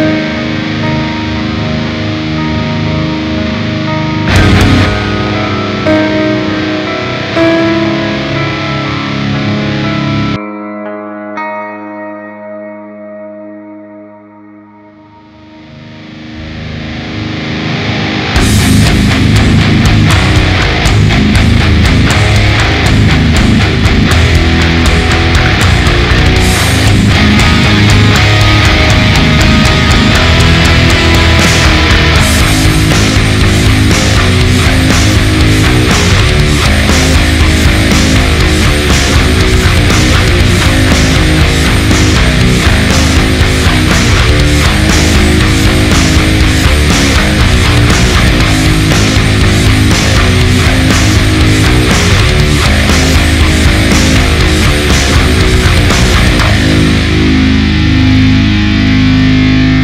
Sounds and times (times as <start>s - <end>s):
Music: 0.0s - 59.8s.